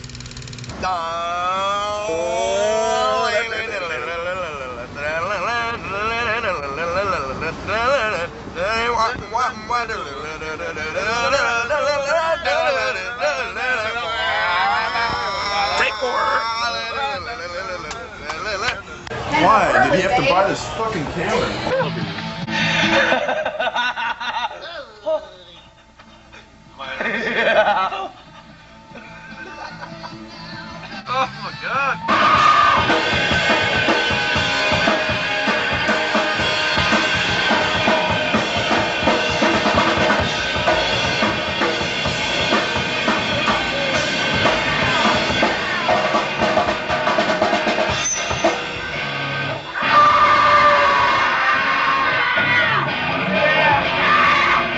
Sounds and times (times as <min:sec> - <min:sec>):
Music: 0:20.2 - 0:23.4, 0:26.0 - 0:54.7.